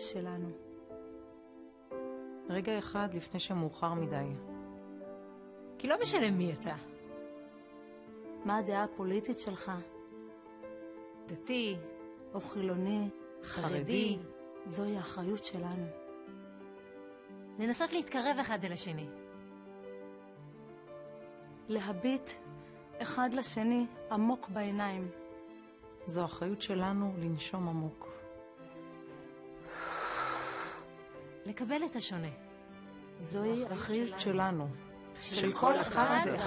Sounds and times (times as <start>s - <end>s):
Speech: 12.4s - 15.9s, 33.2s - 36.4s.